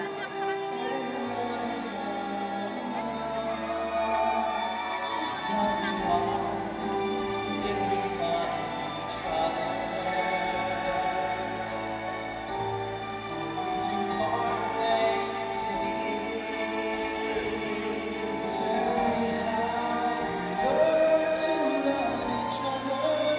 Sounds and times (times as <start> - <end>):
Male singing: 0.0 - 12.2, 13.5 - 23.3
Music: 0.0 - 23.3.